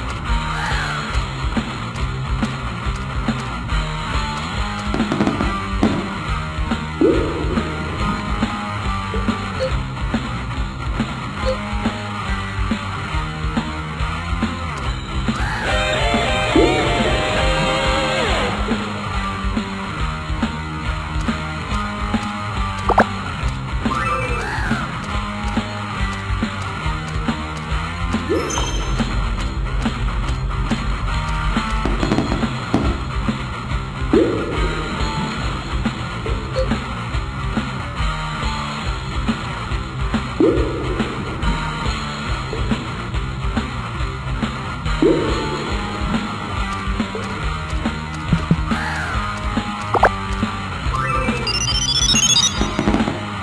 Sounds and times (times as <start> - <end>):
Music: 0.0 - 53.4.